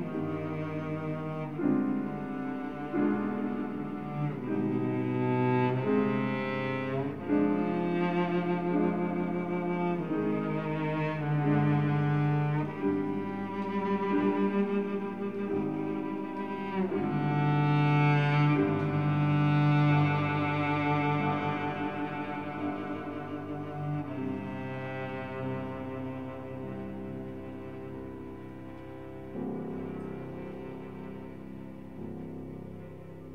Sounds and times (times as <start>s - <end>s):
Cello: 0.0s - 33.3s
Classical music: 0.0s - 33.3s
Piano: 0.0s - 33.3s.